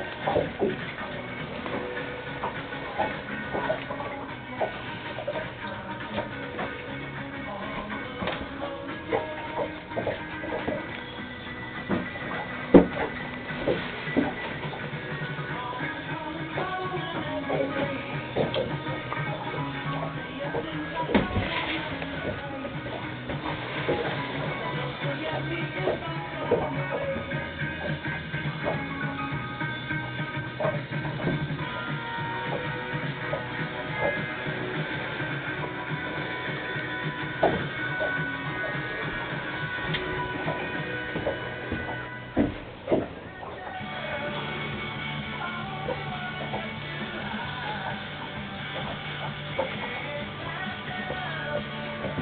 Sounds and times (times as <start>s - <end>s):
Music: 0.0s - 52.2s.